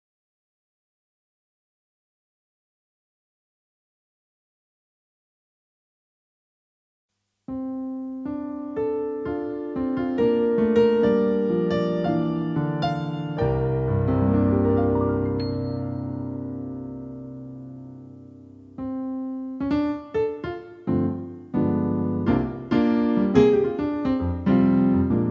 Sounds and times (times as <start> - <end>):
Electric piano: 7.5 - 25.3.